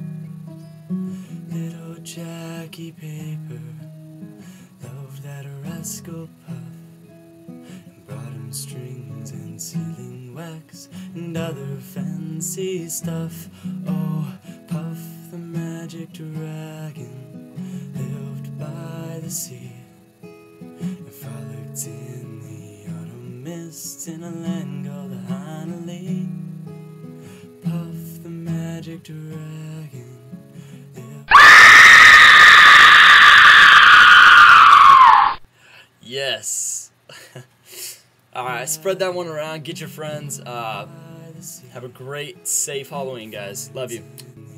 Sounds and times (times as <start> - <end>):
Guitar: 0.0 - 35.5, 38.2 - 44.5.